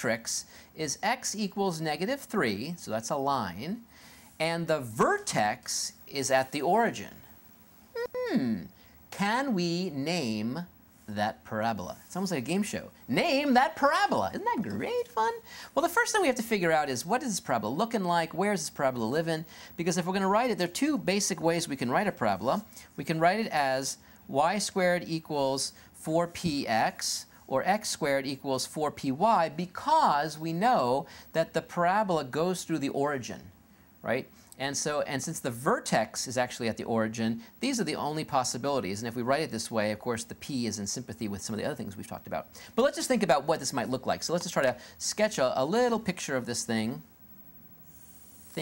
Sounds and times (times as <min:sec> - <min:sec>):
Speech: 0:00.0 - 0:03.8, 0:04.4 - 0:07.3, 0:08.0 - 0:47.1.